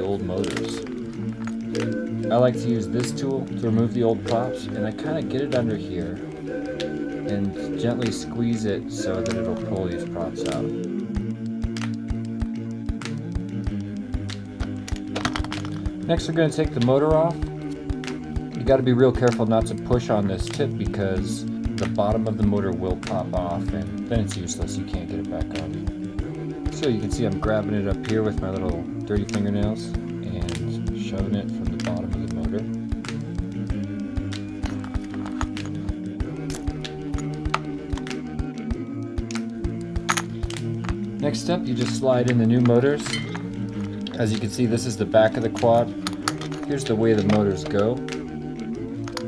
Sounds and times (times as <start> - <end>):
Speech: 0.0 - 0.8, 2.3 - 6.2, 7.3 - 10.7, 16.1 - 17.4, 18.6 - 25.7, 26.7 - 32.7, 41.2 - 43.1, 44.2 - 45.9, 46.7 - 48.0
Music: 0.0 - 49.2.